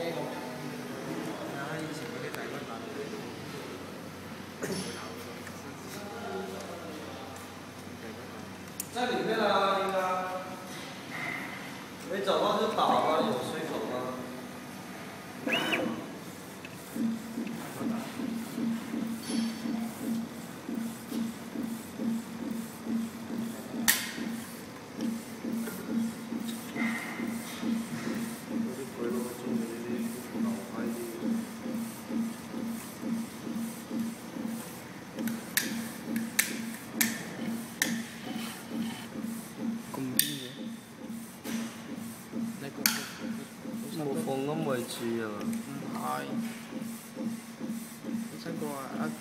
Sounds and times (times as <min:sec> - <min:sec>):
Printer: 0:00.0 - 0:49.2
Speech: 0:04.6 - 0:10.6, 0:12.1 - 0:14.3, 0:28.6 - 0:31.4, 0:42.4 - 0:46.5, 0:48.1 - 0:49.2.